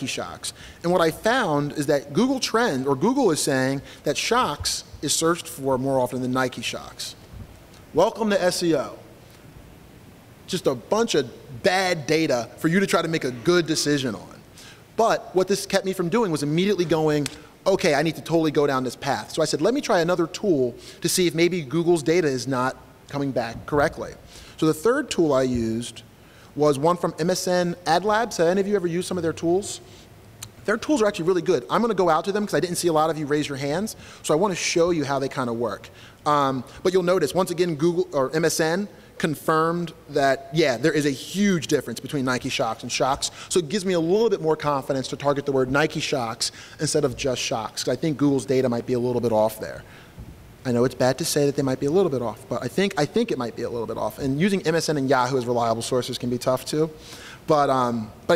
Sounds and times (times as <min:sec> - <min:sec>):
Speech: 0:00.0 - 0:07.2, 0:07.9 - 0:09.0, 0:10.5 - 0:14.4, 0:15.0 - 0:29.9, 0:30.6 - 0:49.8, 0:50.6 - 0:58.3.